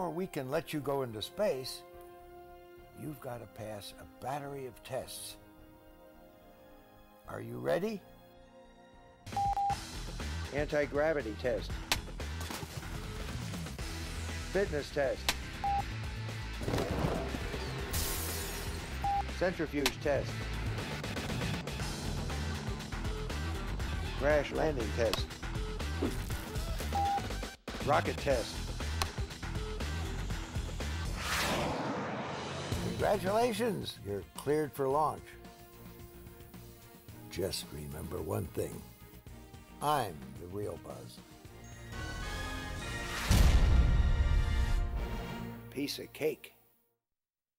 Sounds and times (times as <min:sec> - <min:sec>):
Speech: 0:00.0 - 0:01.8, 0:03.0 - 0:05.4, 0:07.2 - 0:08.0, 0:10.5 - 0:11.7, 0:14.5 - 0:15.2, 0:19.4 - 0:20.3, 0:24.2 - 0:25.3, 0:27.8 - 0:28.6, 0:32.8 - 0:35.4, 0:37.3 - 0:38.8, 0:39.8 - 0:41.2, 0:45.7 - 0:46.6
Music: 0:00.0 - 0:31.7, 0:32.4 - 0:47.0.